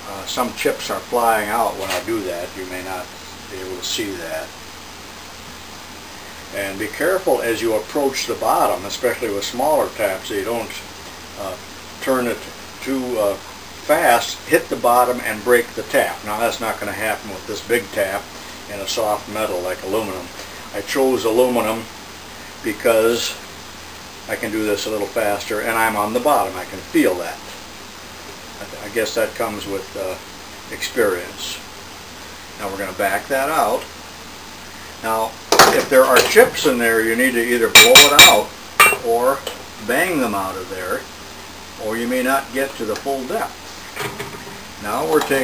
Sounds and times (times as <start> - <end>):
Speech: 0.0 - 4.5, 6.5 - 21.9, 22.6 - 23.4, 24.3 - 27.6, 28.6 - 31.7, 32.6 - 33.9, 35.0 - 41.1, 41.8 - 43.6, 44.8 - 45.4.